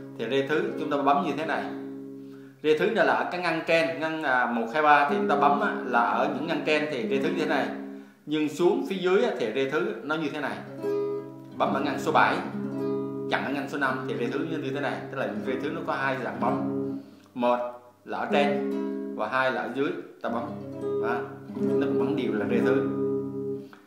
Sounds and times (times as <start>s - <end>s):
Speech: 0.2s - 1.8s, 2.6s - 10.7s, 11.6s - 12.5s, 13.3s - 16.7s, 17.4s - 18.6s, 19.2s - 22.9s
Strum: 3.9s - 8.1s, 10.5s - 23.8s.